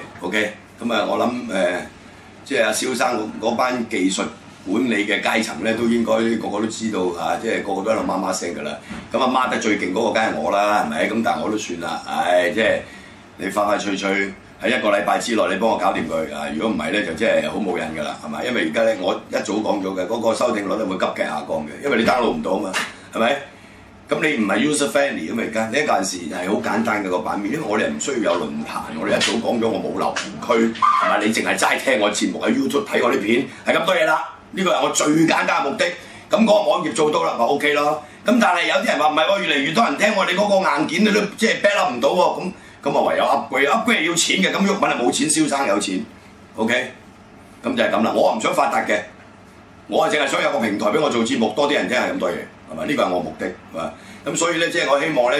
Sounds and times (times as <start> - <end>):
Speech: 0.0 - 23.5, 24.1 - 47.0, 47.6 - 49.2, 49.9 - 55.3.